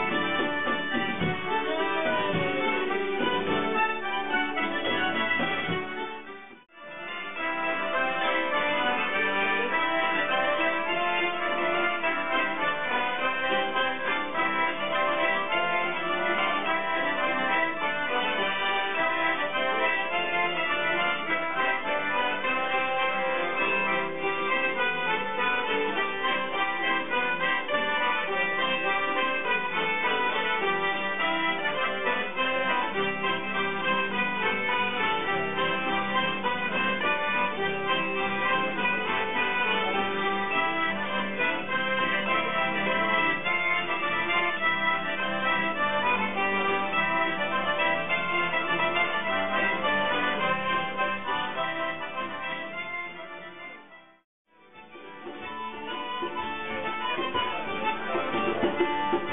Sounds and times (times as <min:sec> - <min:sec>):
Folk music: 0:00.0 - 0:59.3
Traditional music: 0:00.0 - 0:59.3.